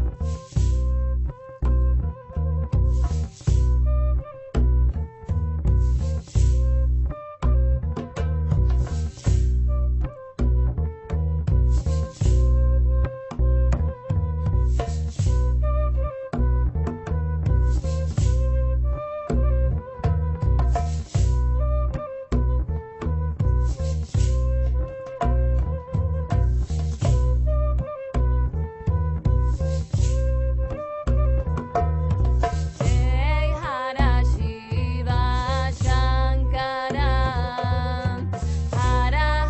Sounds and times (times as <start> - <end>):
Mantra: 32.9 - 38.2.